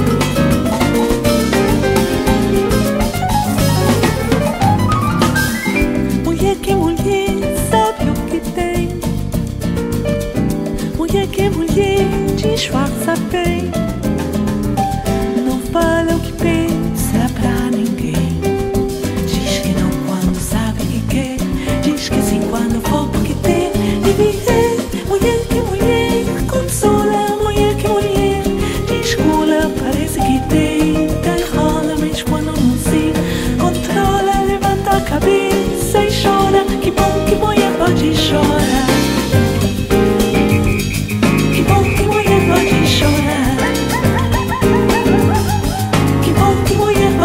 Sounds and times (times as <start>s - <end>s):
Guitar: 0.0s - 47.2s
Happy music: 0.0s - 47.2s
Singing: 19.5s - 47.2s.